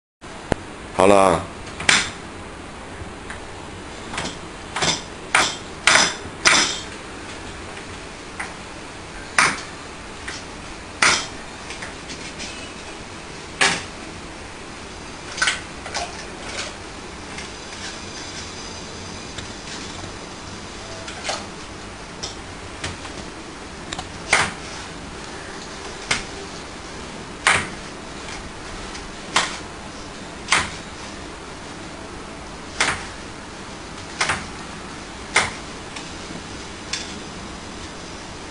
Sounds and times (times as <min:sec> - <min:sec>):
Speech: 0:01.0 - 0:01.6.